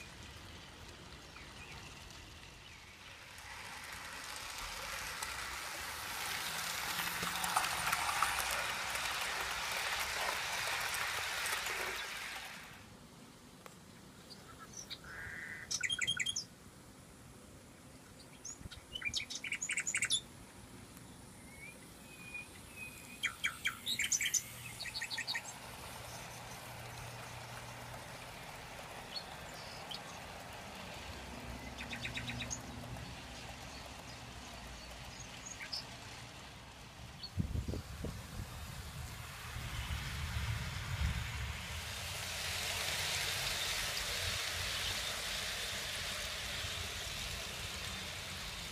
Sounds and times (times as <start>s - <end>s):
Chirp, tweet: 14.3s - 16.5s, 18.2s - 20.3s.